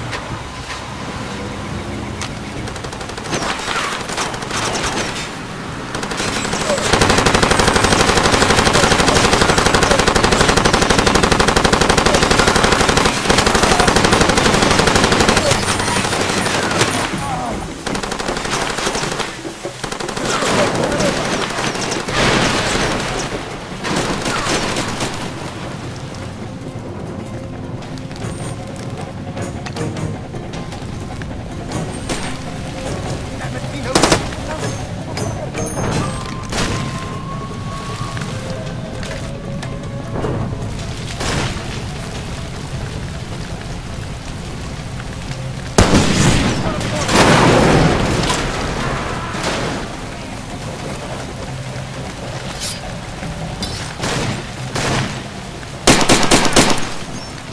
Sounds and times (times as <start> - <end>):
Music: 0.0 - 57.5.